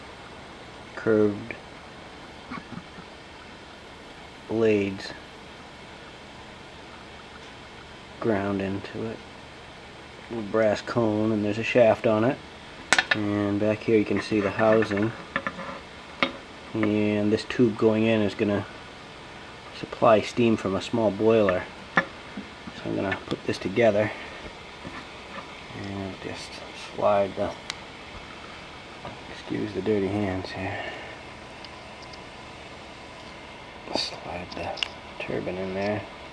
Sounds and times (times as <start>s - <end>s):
Speech: 0.9s - 1.6s, 4.5s - 5.2s, 8.2s - 9.2s, 10.3s - 12.4s, 13.1s - 15.2s, 16.7s - 18.7s, 19.7s - 21.7s, 22.7s - 24.2s, 25.7s - 27.6s, 29.3s - 31.0s, 33.9s - 36.1s.